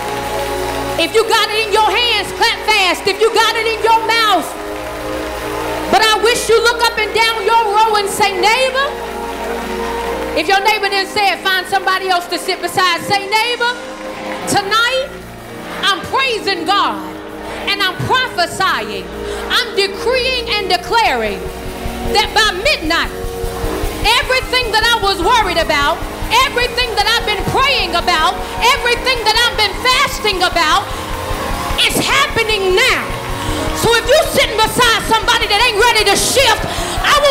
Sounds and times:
Music: 0.0s - 37.3s
Speech: 5.9s - 8.9s, 17.7s - 21.4s, 22.1s - 23.1s, 24.0s - 30.8s, 31.8s - 33.1s, 33.8s - 37.3s.

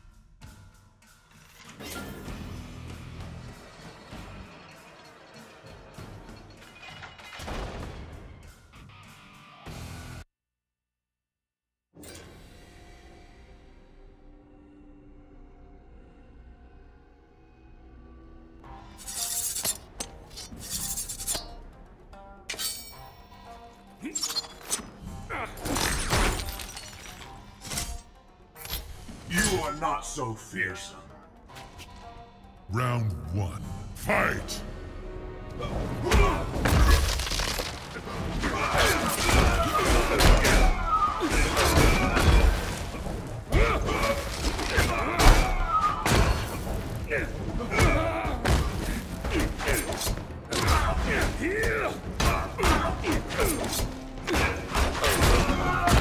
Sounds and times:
Music: 0.0s - 10.3s, 12.0s - 56.0s.

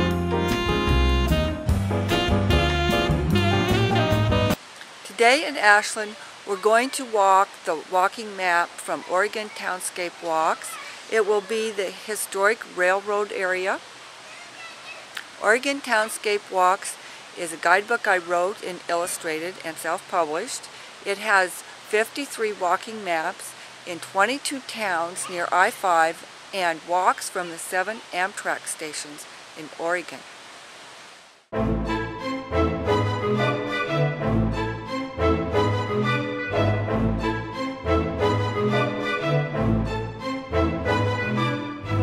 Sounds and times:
Music: 0.0s - 4.6s, 31.6s - 42.0s
Speech: 5.1s - 30.2s.

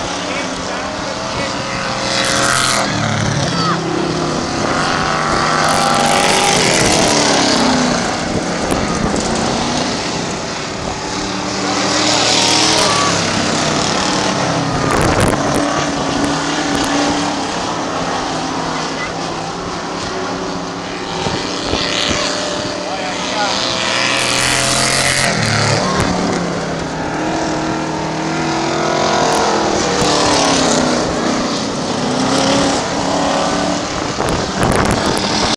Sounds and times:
Skidding: 0.0s - 35.5s.

